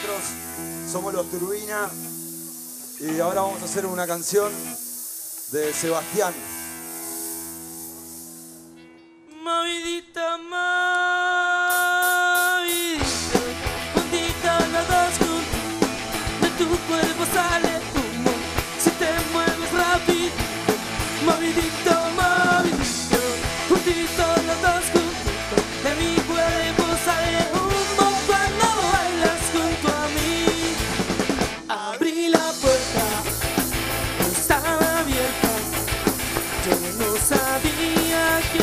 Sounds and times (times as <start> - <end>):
Disco: 11.8 - 38.6.